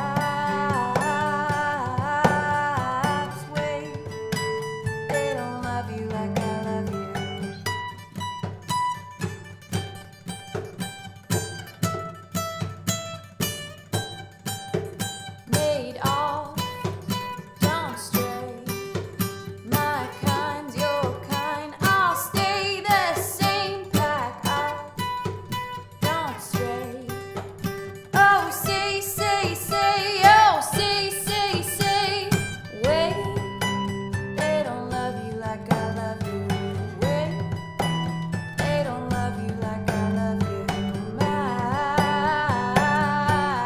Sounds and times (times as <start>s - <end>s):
Music: 0.0s - 43.6s.